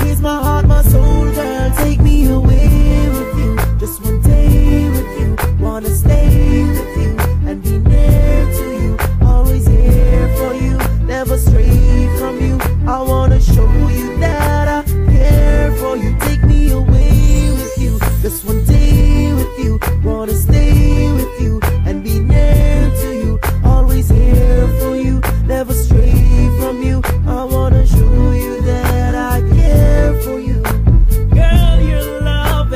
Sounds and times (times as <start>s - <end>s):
Reggae: 0.0s - 32.7s.